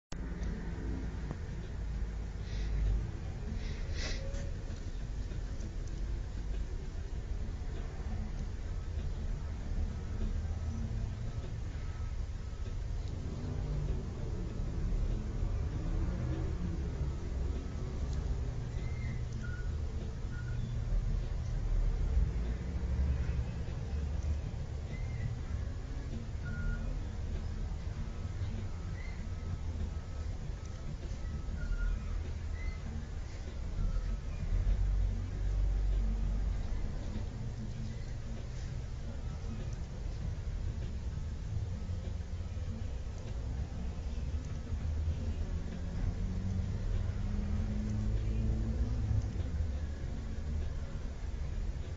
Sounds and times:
Music: 0.2s - 51.9s
Reversing beeps: 19.0s - 20.7s, 26.4s - 27.0s.

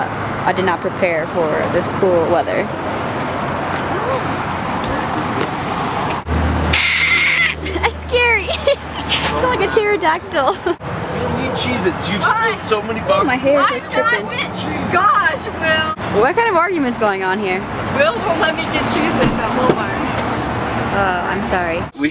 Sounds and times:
Car: 0.0s - 22.1s
Outside, urban or manmade: 0.0s - 22.1s.

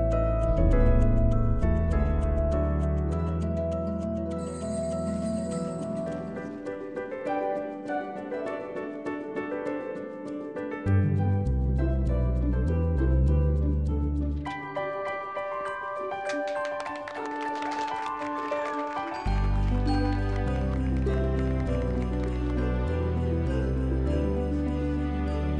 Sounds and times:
Christmas music: 0.0s - 25.5s
Theme music: 0.2s - 4.9s, 13.9s - 25.5s.

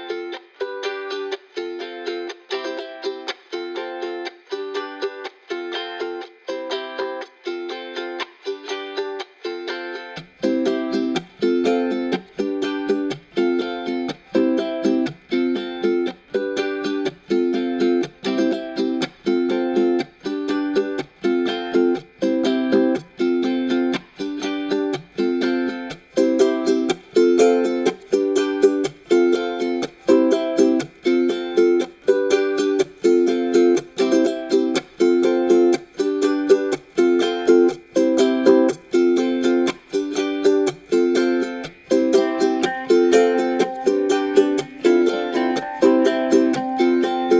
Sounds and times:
Music: 0.0s - 47.3s.

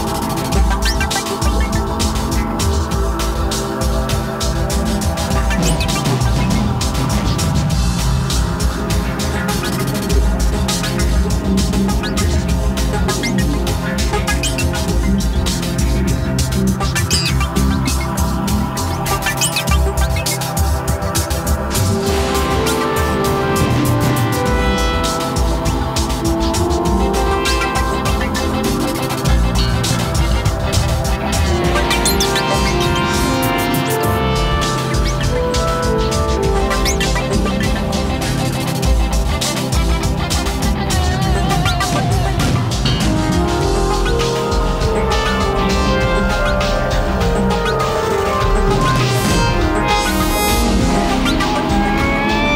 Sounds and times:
Electronic music: 0.0s - 52.5s.

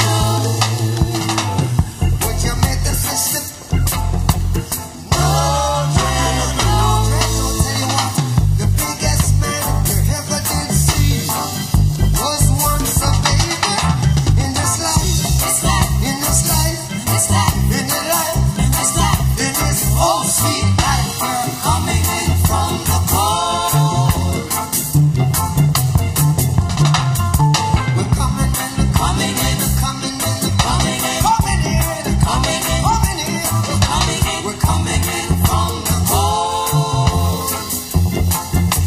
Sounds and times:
Reggae: 0.0s - 38.8s
Ska: 0.0s - 38.8s.

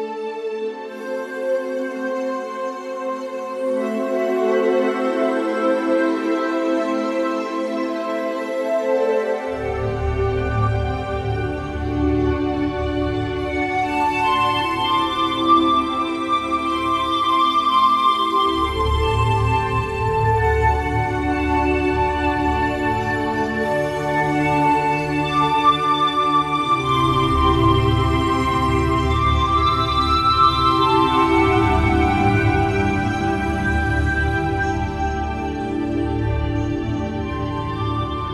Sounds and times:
Music: 0.0s - 38.3s.

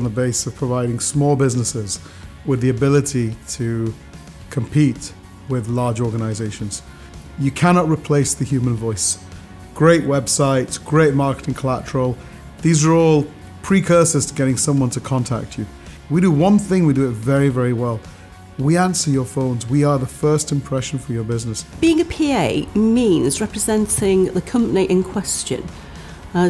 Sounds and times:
Speech: 0.0s - 6.8s, 7.4s - 9.2s, 9.8s - 18.0s, 18.6s - 25.7s
Music: 0.0s - 26.4s.

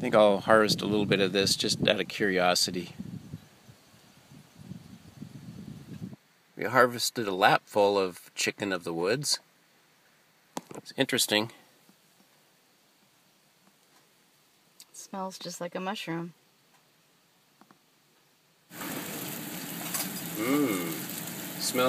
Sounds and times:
Speech: 0.0s - 3.0s, 6.6s - 9.4s, 10.8s - 11.6s, 15.0s - 16.4s, 21.6s - 21.8s.

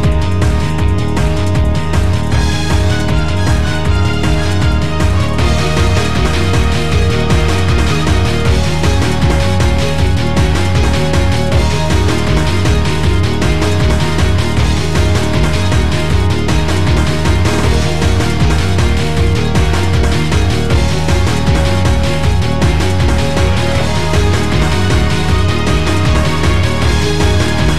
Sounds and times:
Exciting music: 0.0s - 27.7s.

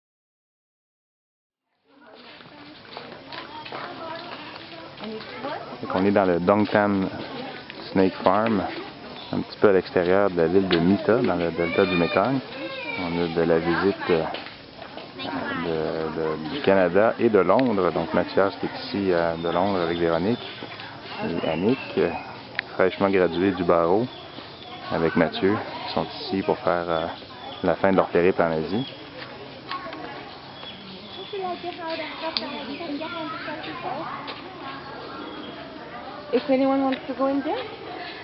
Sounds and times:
Outside, rural or natural: 1.7s - 38.2s.

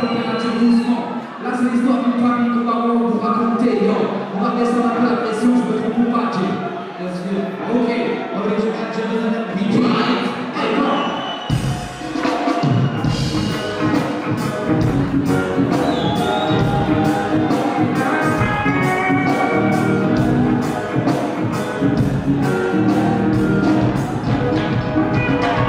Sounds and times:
Speech: 0.0s - 11.1s
Music: 11.4s - 25.6s.

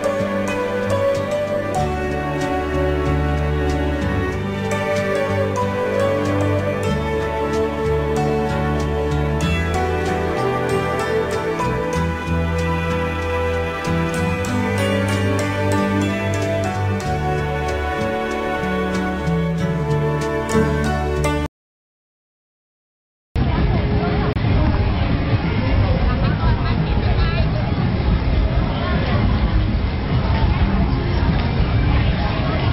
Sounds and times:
Tender music: 0.0s - 21.5s
Speech: 23.4s - 32.7s.

